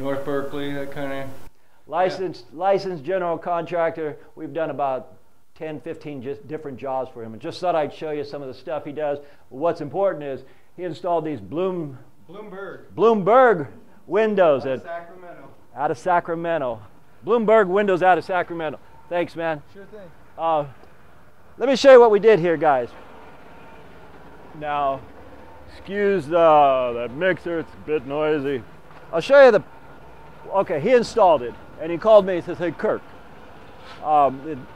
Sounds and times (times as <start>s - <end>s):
Speech: 0.0s - 20.8s, 21.6s - 23.0s, 24.6s - 25.1s, 25.7s - 29.6s, 30.5s - 33.0s, 34.0s - 34.7s.